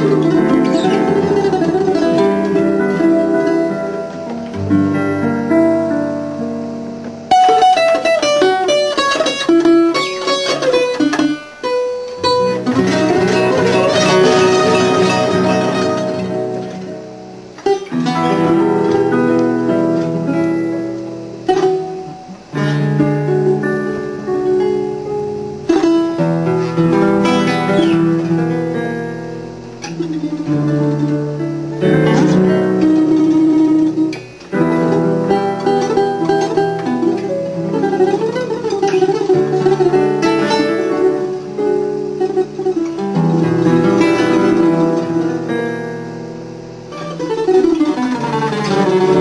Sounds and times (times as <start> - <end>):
Ukulele: 0.0 - 5.9, 6.8 - 49.2.